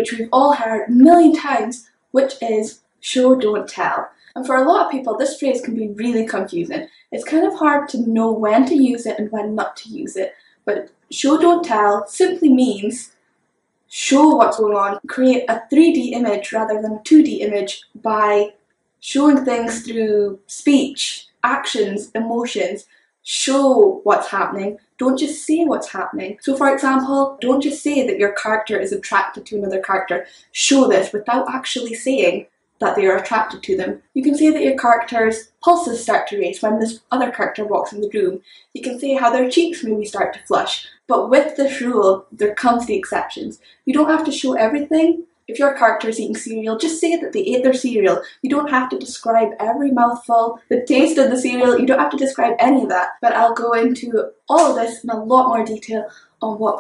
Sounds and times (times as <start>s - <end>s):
Speech: 0.0s - 13.1s, 13.9s - 56.8s.